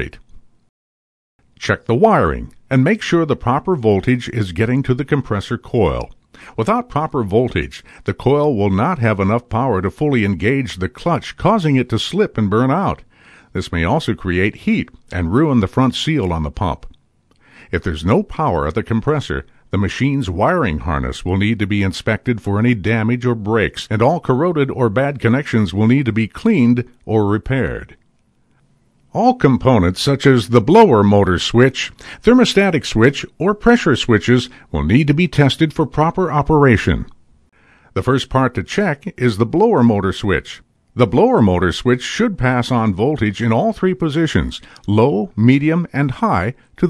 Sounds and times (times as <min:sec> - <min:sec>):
Speech: 0:00.0 - 0:00.3, 0:01.6 - 0:17.0, 0:17.7 - 0:28.0, 0:29.1 - 0:37.2, 0:38.0 - 0:46.8.